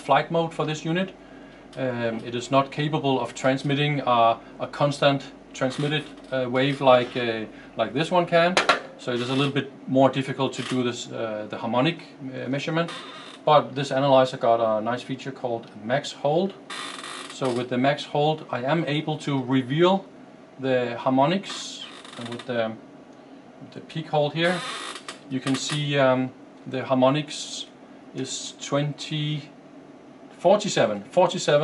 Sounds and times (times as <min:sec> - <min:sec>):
Speech: 0:00.0 - 0:01.2, 0:01.8 - 0:16.6, 0:17.4 - 0:22.8, 0:23.6 - 0:24.7, 0:25.3 - 0:29.6, 0:30.4 - 0:31.6.